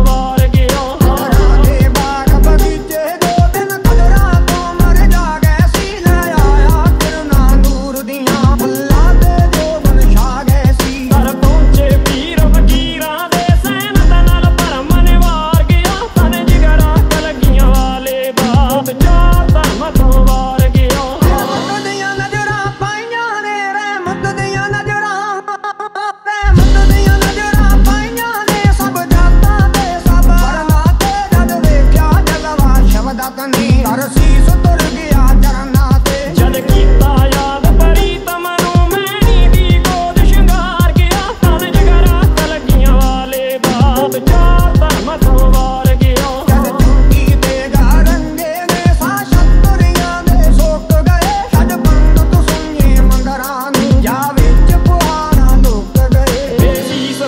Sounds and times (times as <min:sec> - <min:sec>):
Rhythm and blues: 0:00.0 - 0:25.8, 0:26.4 - 0:57.2.